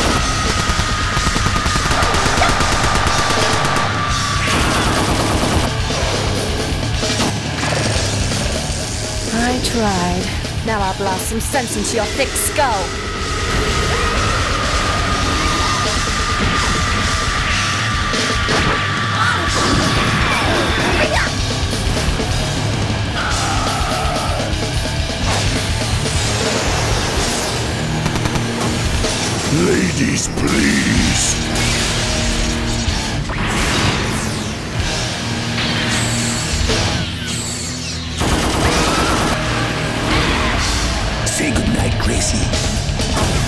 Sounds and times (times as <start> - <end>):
Heavy metal: 0.0 - 43.4
Speech: 9.3 - 12.9, 29.5 - 31.4, 41.3 - 42.6.